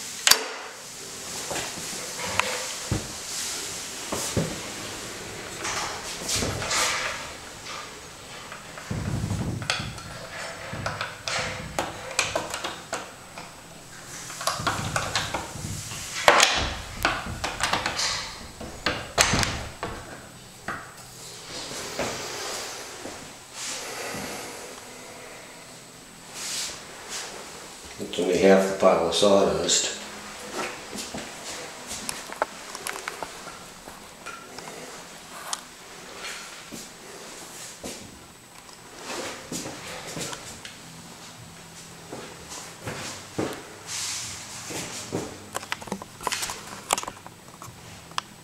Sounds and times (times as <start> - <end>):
Sliding door: 0.2 - 27.8, 30.1 - 40.8.